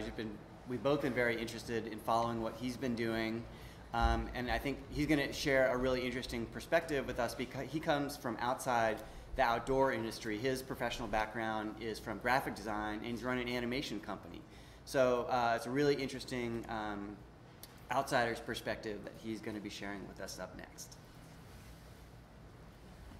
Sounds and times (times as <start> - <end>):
Speech: 0.0 - 17.2, 17.9 - 21.0.